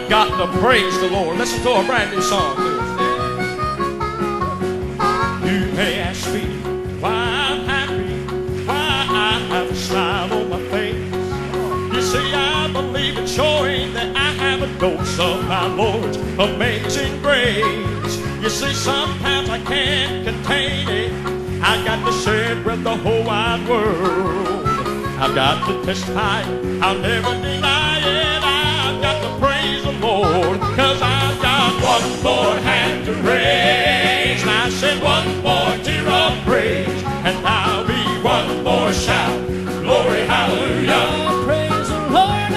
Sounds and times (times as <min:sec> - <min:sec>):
Music: 0:00.0 - 0:42.5.